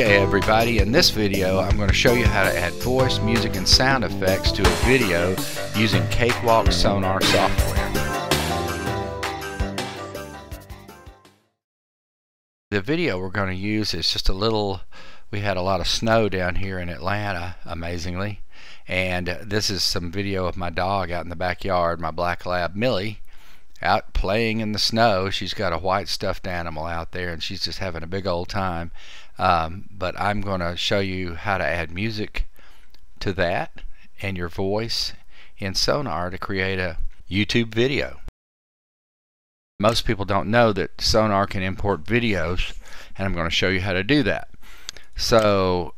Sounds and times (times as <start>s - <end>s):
Speech: 0.0s - 8.0s, 12.7s - 23.2s, 23.8s - 32.5s, 33.2s - 38.3s, 39.8s - 44.5s, 45.2s - 45.9s.